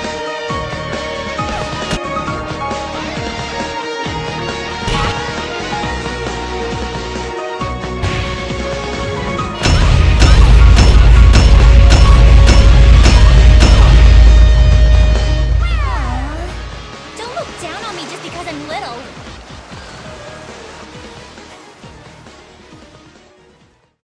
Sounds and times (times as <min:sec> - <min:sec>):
Water: 0:15.8 - 0:24.0.